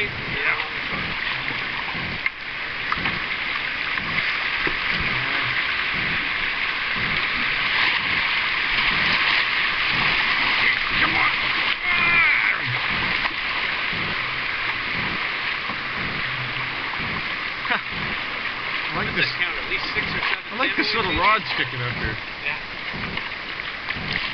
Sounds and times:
Speech: 0.0 - 1.1, 19.0 - 22.6
Stream: 0.0 - 24.3.

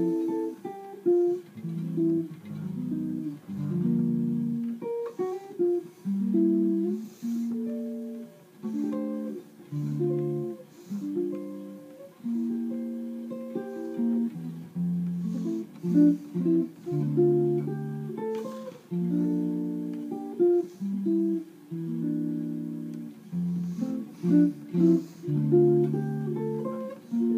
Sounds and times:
Acoustic guitar: 0.0 - 27.3
Strum: 0.0 - 27.3.

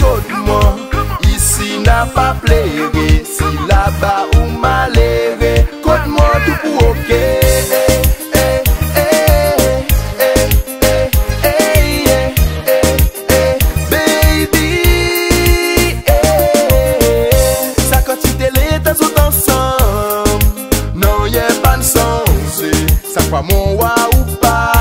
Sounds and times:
Tender music: 0.0 - 24.8.

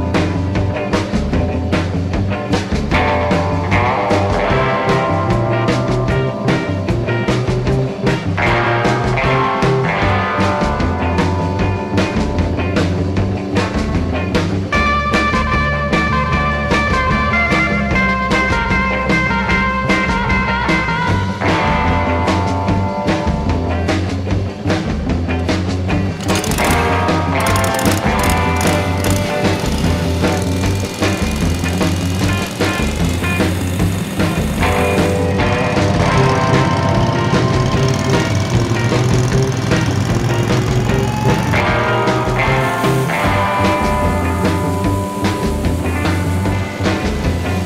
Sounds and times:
Music: 0.0 - 47.6.

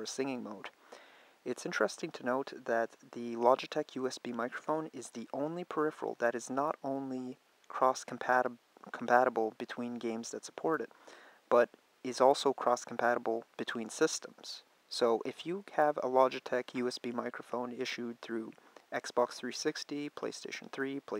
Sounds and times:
Speech: 0.0 - 0.8, 1.4 - 10.9, 11.5 - 21.1.

